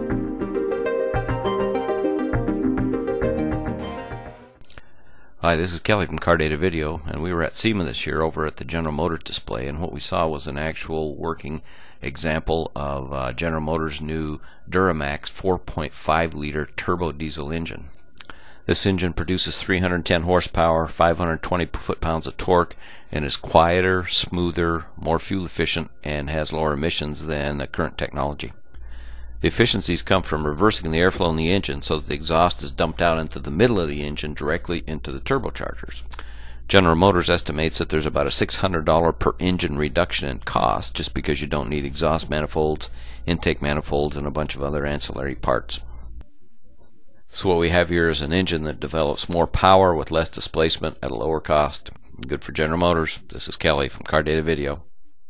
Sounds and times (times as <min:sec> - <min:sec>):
Speech: 0:05.4 - 0:18.0, 0:18.7 - 0:28.6, 0:29.4 - 0:36.1, 0:36.7 - 0:45.9, 0:47.3 - 0:54.9.